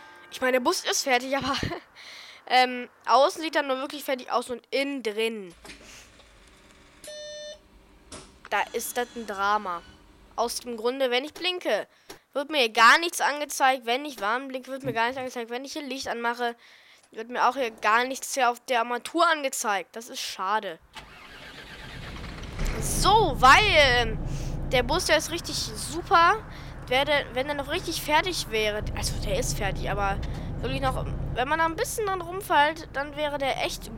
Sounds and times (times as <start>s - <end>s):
Speech: 0.4s - 1.8s, 2.5s - 5.6s, 8.5s - 9.8s, 10.4s - 16.6s, 17.2s - 20.8s, 22.7s - 33.9s
Bus: 5.6s - 10.4s, 20.9s - 33.9s.